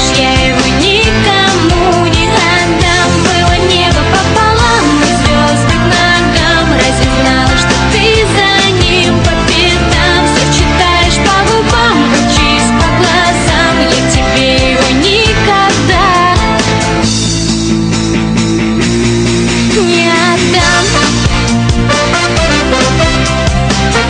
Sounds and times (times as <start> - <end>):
Rock music: 0.0 - 24.1.